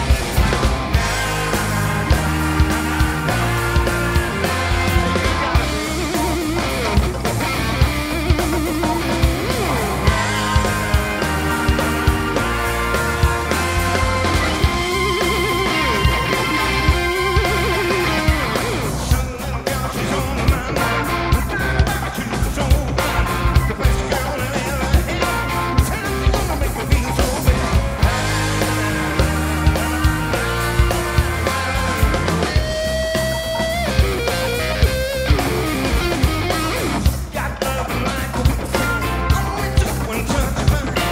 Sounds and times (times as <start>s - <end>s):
Music: 0.0s - 41.1s.